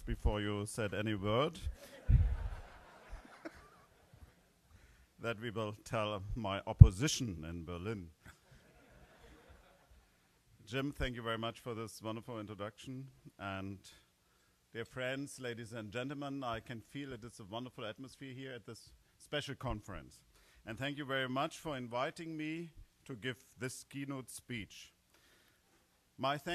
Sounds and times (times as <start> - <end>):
Male speech, man speaking: 0.0 - 1.7, 5.2 - 8.2, 10.7 - 14.0, 14.8 - 25.0, 26.2 - 26.5
Narration, monologue: 0.0 - 26.5.